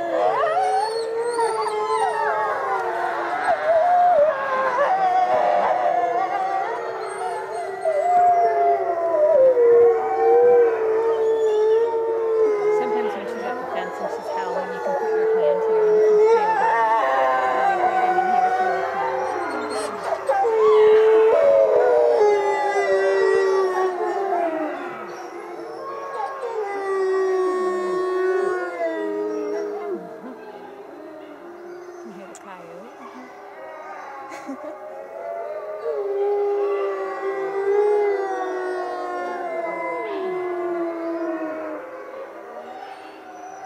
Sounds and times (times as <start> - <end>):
Howl: 0.0 - 43.6
Speech: 11.5 - 20.0, 32.1 - 33.3.